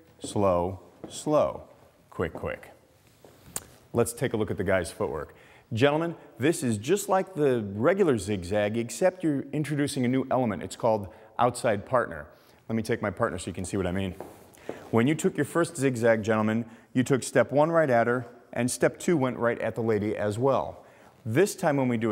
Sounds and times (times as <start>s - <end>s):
Speech: 0.0s - 2.8s, 3.9s - 14.2s, 14.9s - 22.1s.